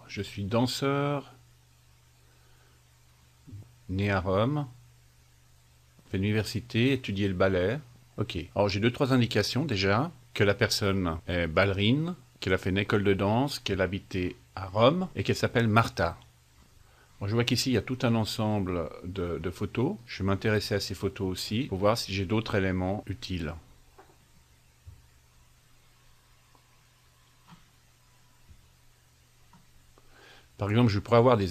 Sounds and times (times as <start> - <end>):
Speech: 0.0 - 1.4, 3.5 - 4.8, 6.1 - 16.3, 17.2 - 23.7, 30.6 - 31.5.